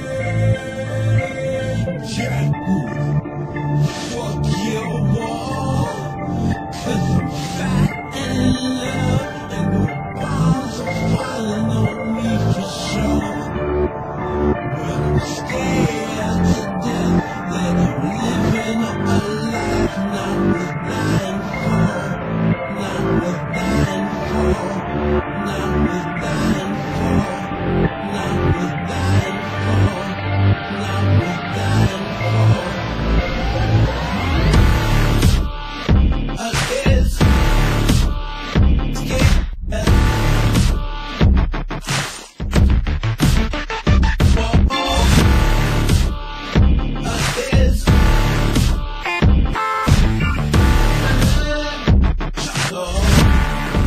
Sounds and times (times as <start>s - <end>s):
Music: 0.0s - 53.8s.